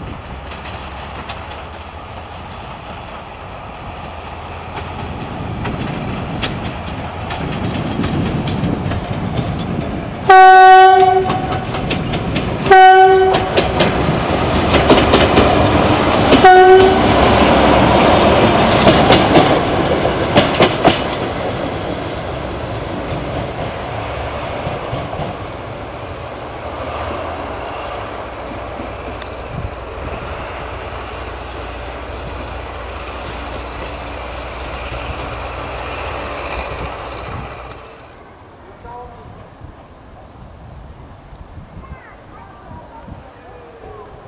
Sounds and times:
Clickety-clack: 0:00.0 - 0:23.9, 0:24.5 - 0:25.6, 0:33.1 - 0:35.6
Railroad car, train wagon: 0:00.0 - 0:44.2
Train horn: 0:10.3 - 0:11.7, 0:12.7 - 0:13.8, 0:16.4 - 0:17.3.

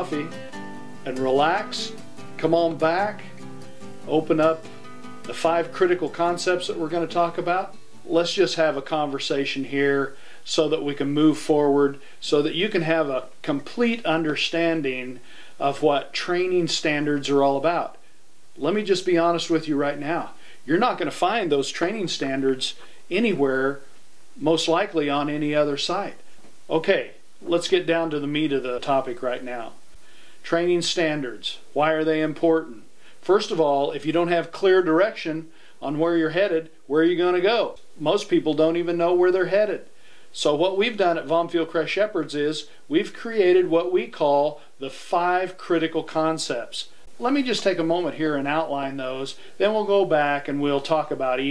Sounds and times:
Speech: 0:00.0 - 0:00.4, 0:01.0 - 0:03.3, 0:04.1 - 0:04.7, 0:05.3 - 0:18.0, 0:18.6 - 0:29.8, 0:30.4 - 0:51.5
Music: 0:00.0 - 0:08.2.

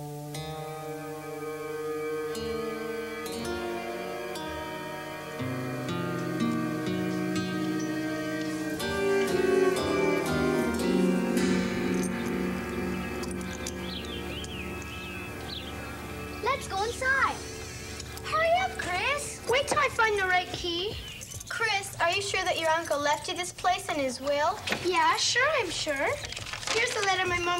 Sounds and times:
Music: 0:00.0 - 0:21.5
Speech: 0:16.4 - 0:17.4, 0:18.3 - 0:27.5.

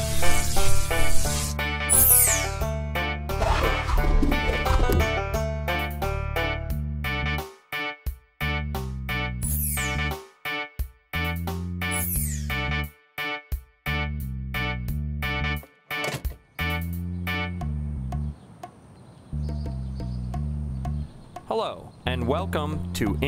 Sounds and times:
Music: 0:00.0 - 0:18.4, 0:19.3 - 0:21.2.

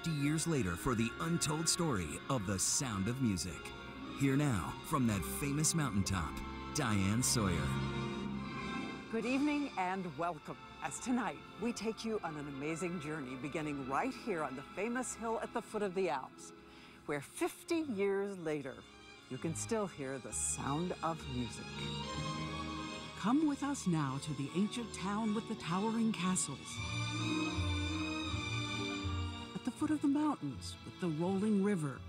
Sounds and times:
Speech: 0:00.0 - 0:03.6, 0:04.2 - 0:07.8, 0:09.1 - 0:16.5, 0:17.1 - 0:21.9, 0:23.2 - 0:26.6, 0:29.6 - 0:32.0
Tender music: 0:00.0 - 0:32.0.

